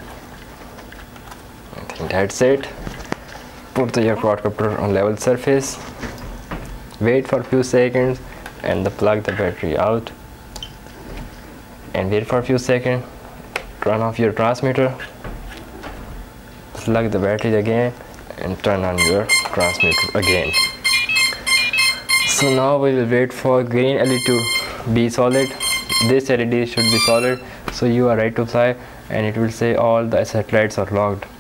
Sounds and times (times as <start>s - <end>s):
Inside, small room: 0.0s - 31.4s
Speech: 1.7s - 2.8s, 3.8s - 5.9s, 7.0s - 10.2s, 11.9s - 13.2s, 13.8s - 15.1s, 16.8s - 20.6s, 22.3s - 31.3s.